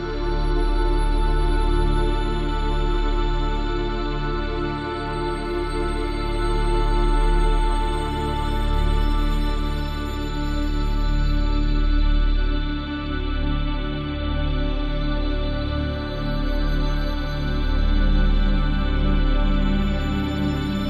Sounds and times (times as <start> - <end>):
Background music: 0.0 - 20.8.